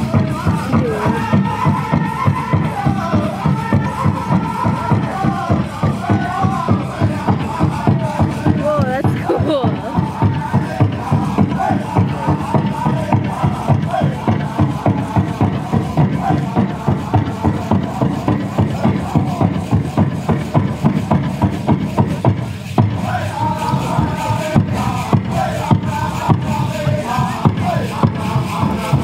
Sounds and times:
Music: 0:00.0 - 0:29.0
Speech: 0:08.6 - 0:09.9.

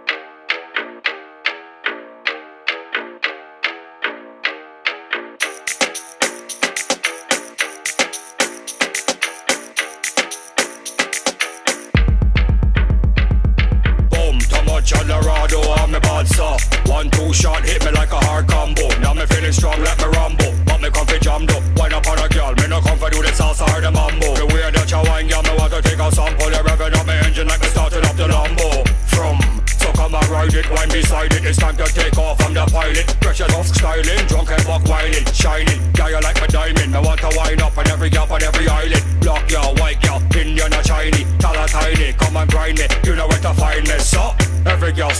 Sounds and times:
Ska: 0:05.4 - 0:45.1.

